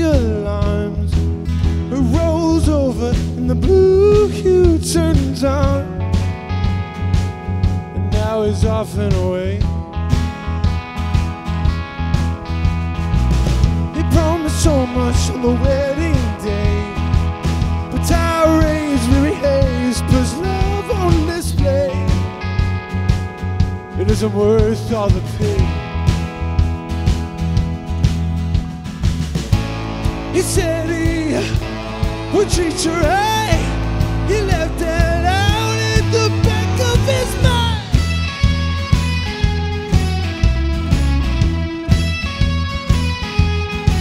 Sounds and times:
Music: 0.0 - 44.0.

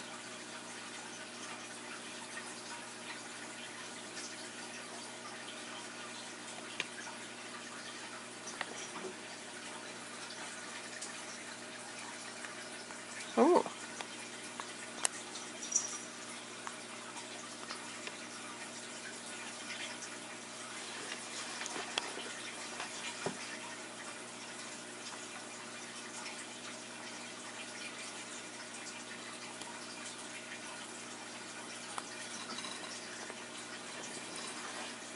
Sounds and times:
Frog: 32.4 - 33.0.

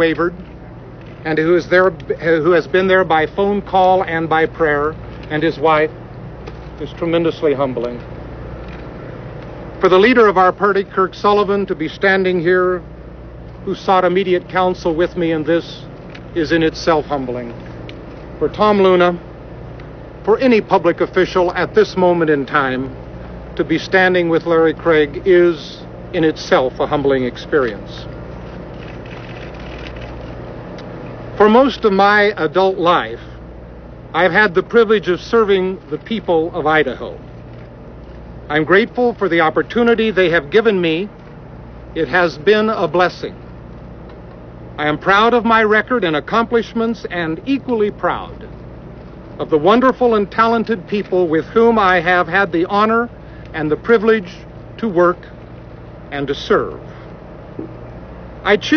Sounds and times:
Male speech, man speaking: 0.0 - 0.4, 1.2 - 5.9, 6.8 - 8.0, 9.8 - 12.8, 13.6 - 17.6, 18.4 - 19.2, 20.3 - 22.9, 23.6 - 28.1, 31.4 - 33.3, 34.2 - 37.2, 38.5 - 41.1, 42.0 - 43.4, 44.8 - 48.5, 49.4 - 55.3, 56.1 - 56.8, 58.5 - 58.7
Narration, monologue: 0.0 - 58.7.

